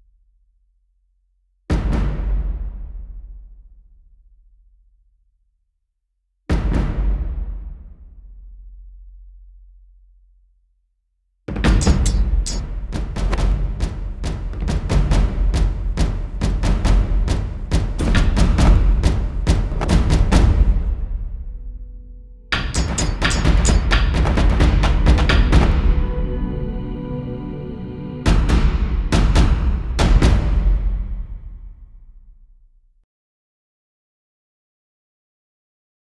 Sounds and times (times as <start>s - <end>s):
Music: 1.7s - 5.1s, 6.5s - 10.4s, 11.5s - 33.0s.